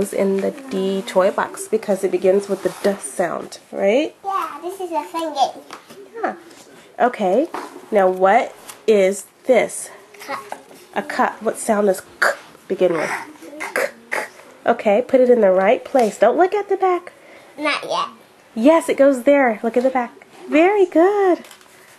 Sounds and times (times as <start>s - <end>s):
Child speech, kid speaking: 4.2s - 6.4s, 10.2s - 10.7s, 12.9s - 13.8s, 17.6s - 18.2s.